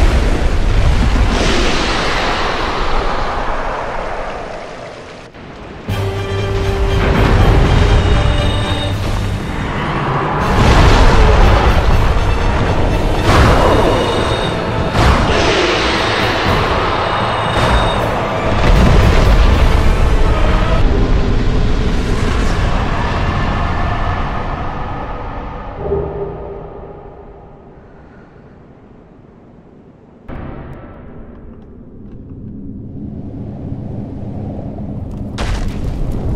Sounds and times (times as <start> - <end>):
Music: 5.8 - 22.4.